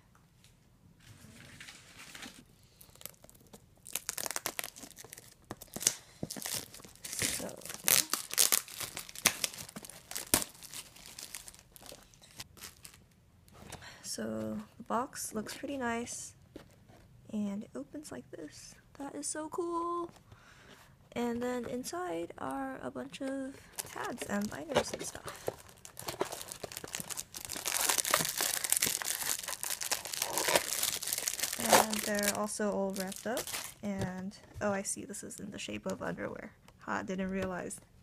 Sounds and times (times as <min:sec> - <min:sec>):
Tearing: 0:02.8 - 0:13.0, 0:25.4 - 0:32.4, 0:33.0 - 0:33.8
Speech: 0:14.1 - 0:16.4, 0:17.3 - 0:20.1, 0:21.2 - 0:25.3, 0:31.6 - 0:37.8.